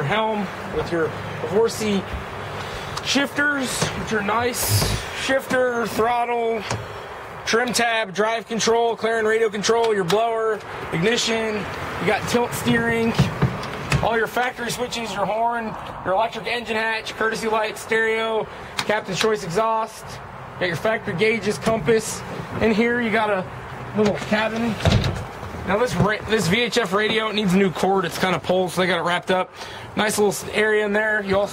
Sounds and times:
Speech: 0:00.0 - 0:02.1, 0:03.0 - 0:06.8, 0:07.4 - 0:25.0, 0:25.7 - 0:31.5
Outside, urban or manmade: 0:00.0 - 0:31.5.

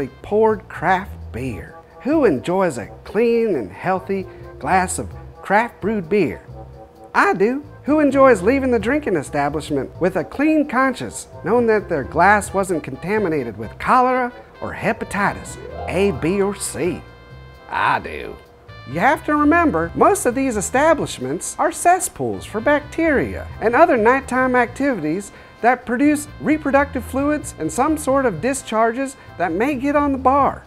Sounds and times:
Speech: 0:00.0 - 0:06.4, 0:07.2 - 0:17.0, 0:17.7 - 0:30.6
Music: 0:00.0 - 0:30.6.

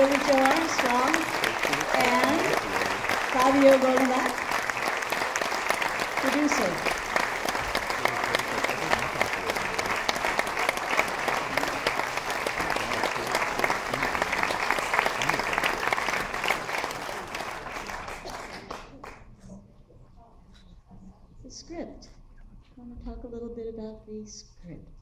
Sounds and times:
Speech: 0:00.0 - 0:04.4, 0:08.0 - 0:10.0, 0:22.8 - 0:25.0.

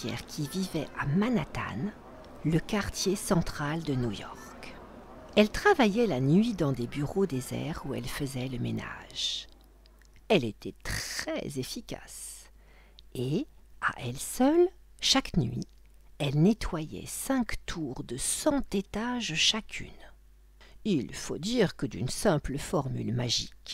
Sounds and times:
Speech: 0:00.0 - 0:09.5, 0:10.3 - 0:12.5, 0:13.1 - 0:20.2, 0:20.8 - 0:23.7.

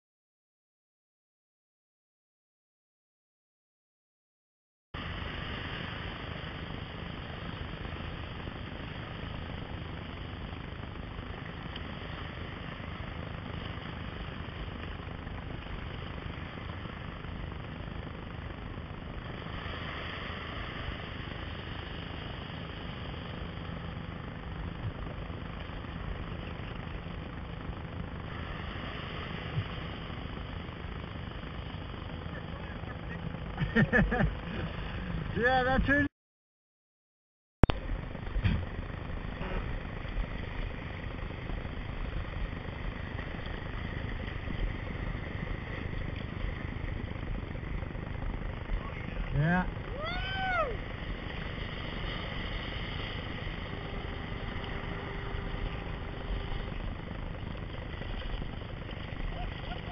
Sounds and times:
Boat, Water vehicle: 0:05.0 - 0:36.1, 0:37.6 - 0:59.9.

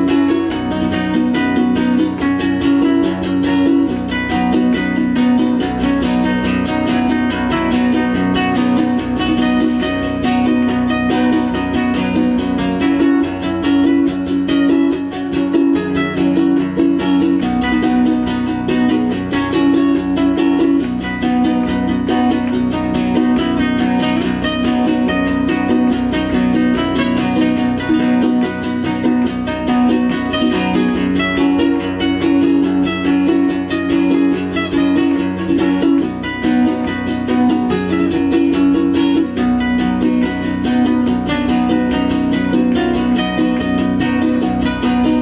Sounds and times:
Guitar: 0:00.0 - 0:45.2
Ukulele: 0:00.0 - 0:45.2.

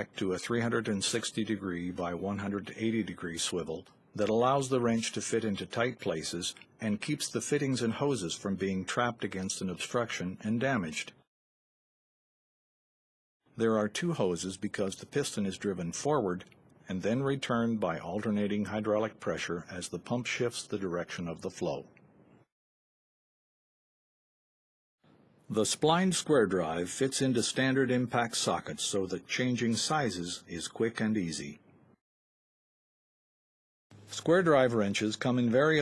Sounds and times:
Speech: 0:00.0 - 0:11.3, 0:13.5 - 0:22.0, 0:25.5 - 0:31.6, 0:34.1 - 0:35.8.

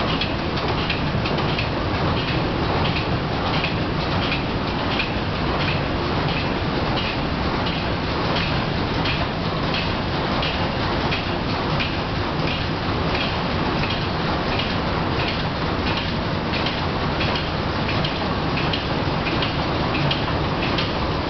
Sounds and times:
Heavy engine (low frequency): 0:00.0 - 0:21.3.

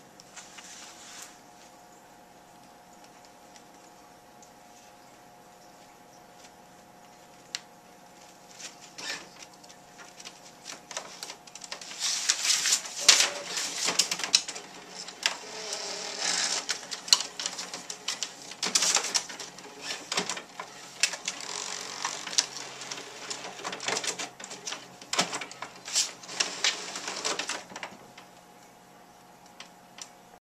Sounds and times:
Printer: 0:09.0 - 0:09.5, 0:10.2 - 0:28.1.

